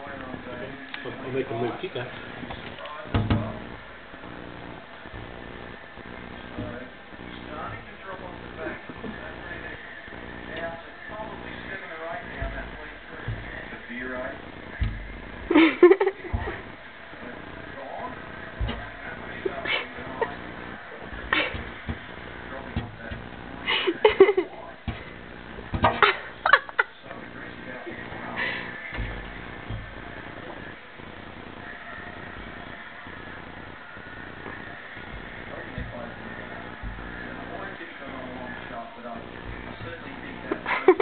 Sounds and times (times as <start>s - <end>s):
Speech: 0.0s - 3.8s, 10.5s - 14.8s, 35.5s - 41.0s
Inside, small room: 0.0s - 41.0s.